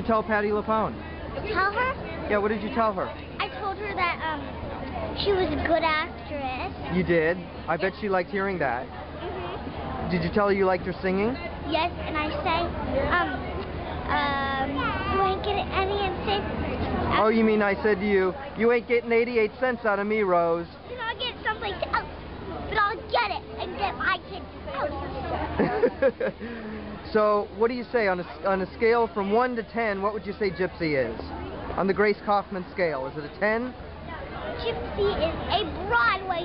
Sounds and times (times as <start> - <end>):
Child speech, kid speaking: 1.4 - 2.2, 3.4 - 6.9, 11.6 - 17.4, 20.8 - 25.4, 34.1 - 36.4.